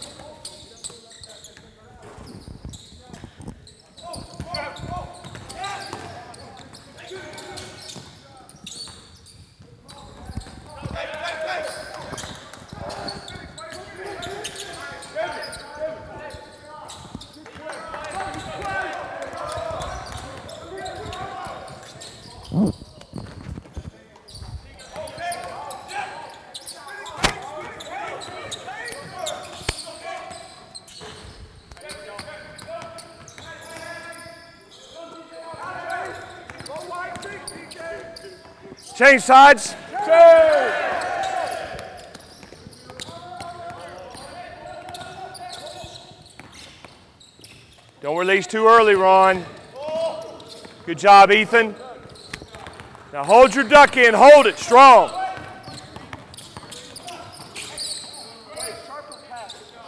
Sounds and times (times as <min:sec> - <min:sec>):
Basketball bounce: 0:52.0 - 0:53.1, 0:55.4 - 0:56.8
Speech: 0:53.2 - 0:55.4.